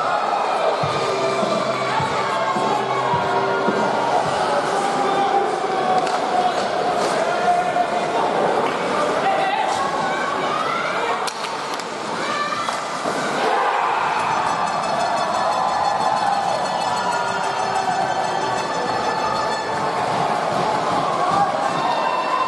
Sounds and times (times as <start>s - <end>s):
Inside, public space: 0.0s - 22.4s
Music: 0.1s - 6.8s, 14.2s - 22.4s
Speech: 1.4s - 11.4s.